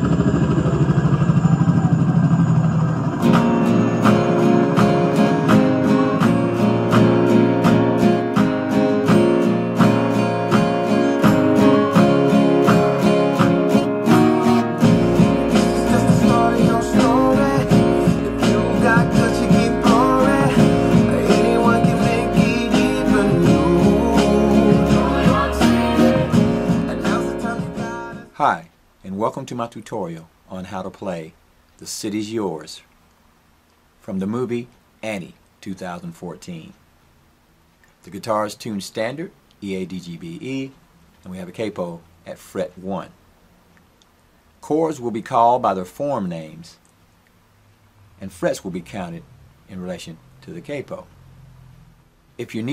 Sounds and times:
Acoustic guitar: 0:00.0 - 0:28.6.

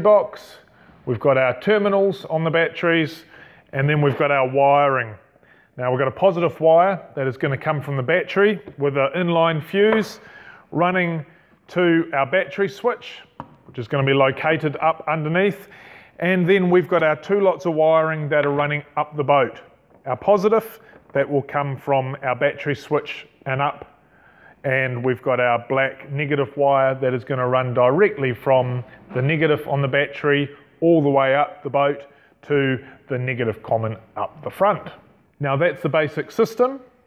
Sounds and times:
Speech: 0:00.0 - 0:05.2, 0:05.8 - 0:23.9, 0:24.6 - 0:37.0.

